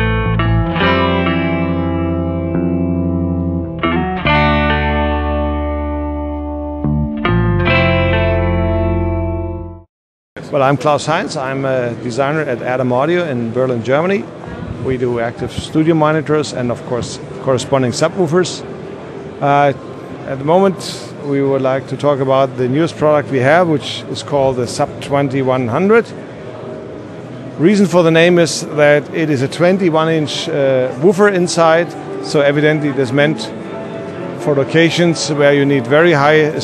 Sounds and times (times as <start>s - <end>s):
Inside, large room or hall: 0.0s - 6.8s, 10.4s - 36.6s
Music: 0.0s - 9.9s, 31.2s - 36.6s
Speech: 10.4s - 18.6s, 19.4s - 26.2s, 27.6s - 33.6s, 34.4s - 36.6s.